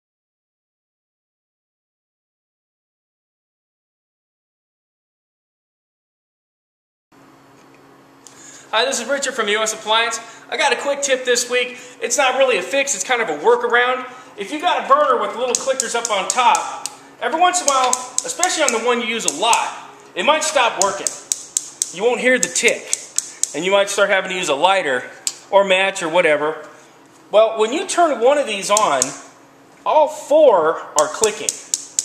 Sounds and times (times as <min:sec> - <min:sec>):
Speech: 0:08.7 - 0:21.2, 0:21.9 - 0:31.6.